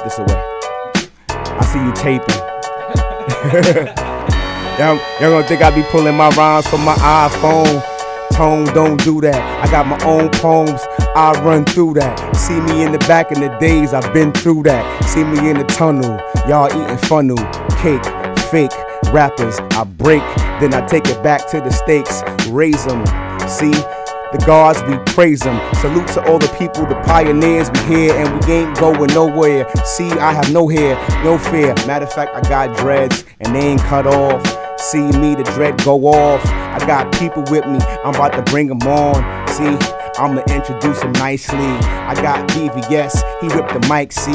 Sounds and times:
Music: 0.0 - 44.3.

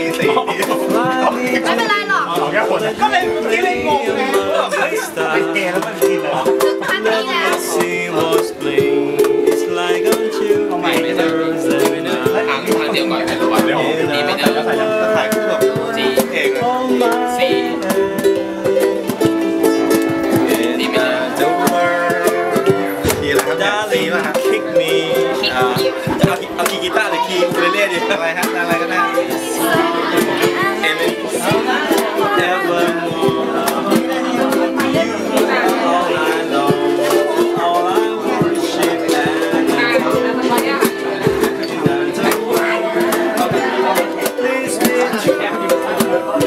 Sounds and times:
Speech: 0.0 - 8.8, 9.6 - 46.4
Ukulele: 0.0 - 46.4.

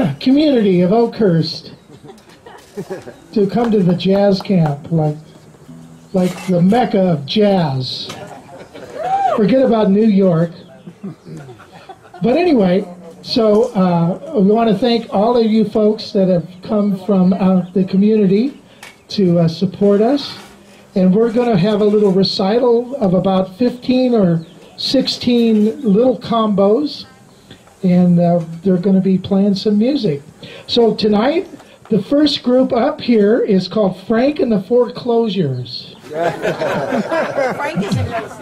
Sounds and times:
Speech: 0.0 - 1.8, 3.4 - 5.3, 6.2 - 8.2, 12.2 - 27.2, 27.8 - 36.0.

